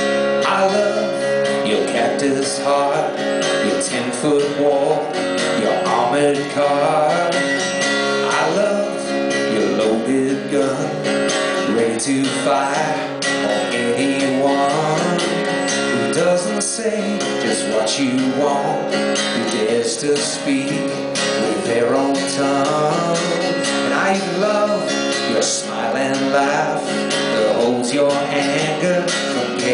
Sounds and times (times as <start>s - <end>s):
Music: 0.0s - 29.7s
Male singing: 0.4s - 7.5s, 8.2s - 29.7s.